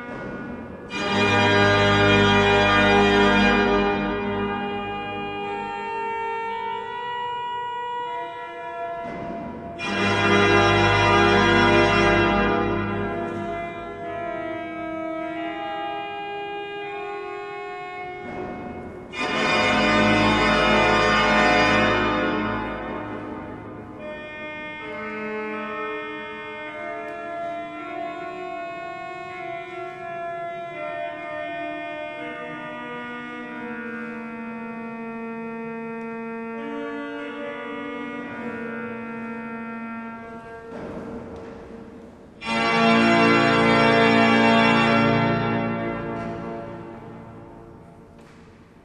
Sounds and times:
Hammond organ: 0.0s - 41.8s, 42.4s - 48.1s.

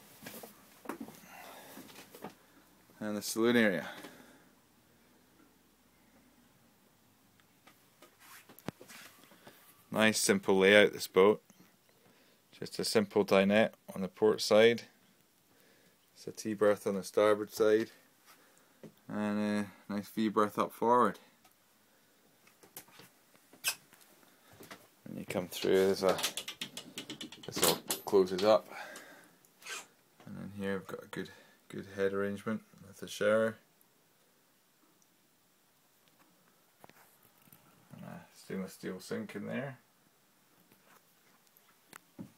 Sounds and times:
Inside, small room: 0.0s - 42.3s
Speech: 3.0s - 4.0s, 9.9s - 11.4s, 12.6s - 15.0s, 16.2s - 18.0s, 19.1s - 21.3s, 25.1s - 26.3s, 27.5s - 28.7s, 30.2s - 33.7s, 37.9s - 39.8s.

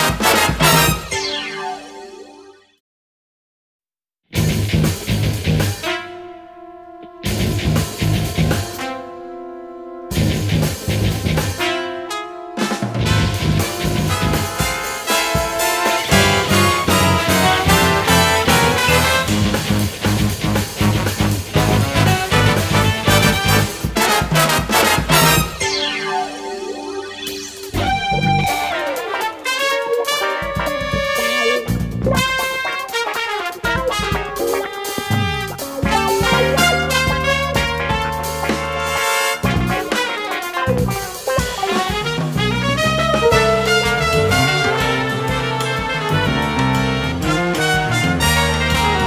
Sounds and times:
Music: 0.0s - 2.8s, 4.4s - 49.0s.

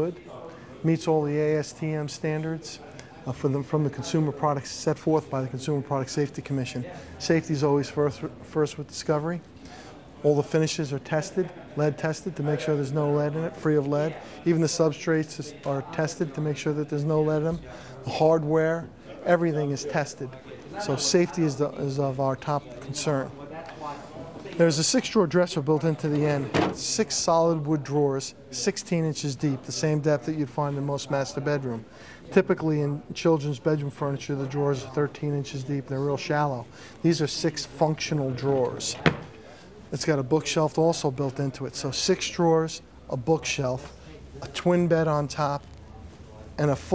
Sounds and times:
Speech: 0.0s - 46.9s.

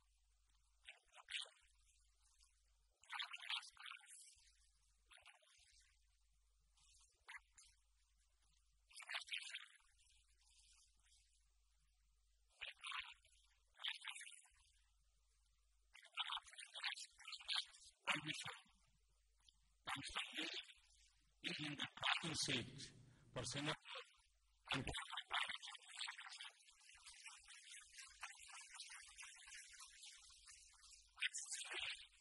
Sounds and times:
Narration, monologue: 17.7s - 25.4s
Male speech, man speaking: 18.1s - 18.5s, 21.4s - 24.0s, 24.7s - 25.0s.

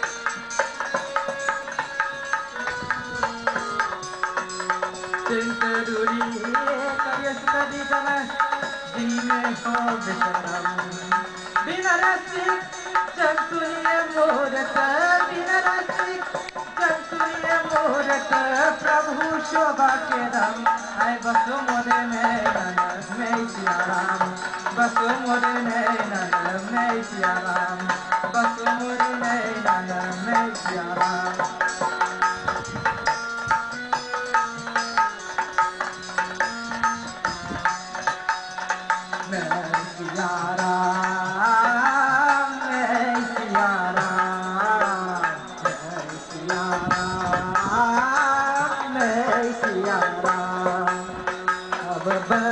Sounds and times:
Music: 0.0s - 52.5s
Male singing: 5.2s - 31.8s, 39.1s - 52.5s.

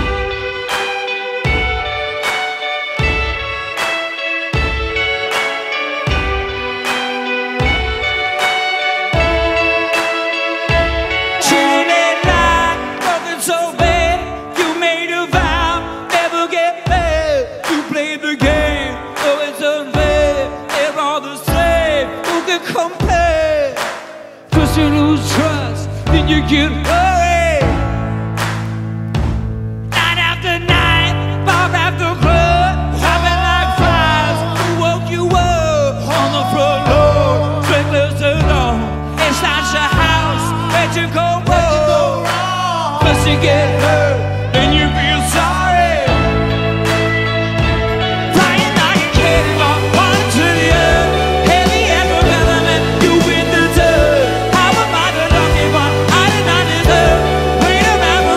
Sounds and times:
Music: 0.0s - 58.3s.

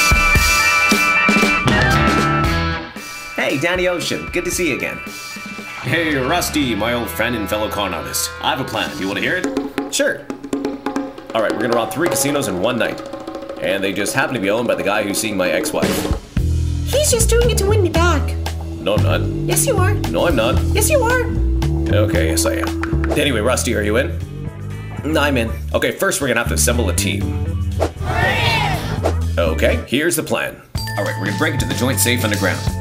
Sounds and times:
Music: 0.0s - 30.0s, 30.6s - 32.8s
Speech: 3.4s - 5.0s, 5.8s - 10.2s, 11.4s - 13.0s, 13.6s - 16.1s, 16.9s - 21.3s, 21.9s - 24.2s, 25.0s - 27.3s, 29.4s - 32.8s.

